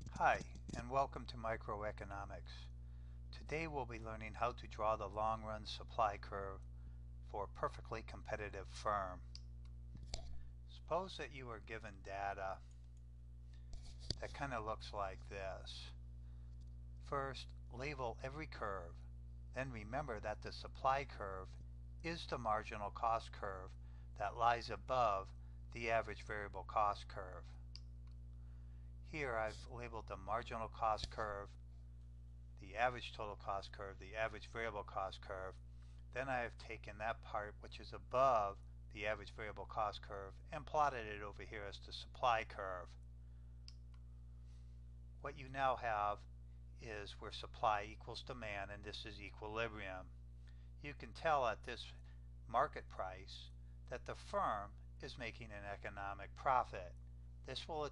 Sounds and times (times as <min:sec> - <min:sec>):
Speech: 0:00.0 - 0:06.6, 0:07.3 - 0:09.4, 0:10.7 - 0:12.7, 0:14.1 - 0:16.0, 0:17.0 - 0:27.6, 0:29.0 - 0:31.6, 0:32.6 - 0:43.0, 0:45.2 - 0:50.2, 0:50.8 - 0:57.9.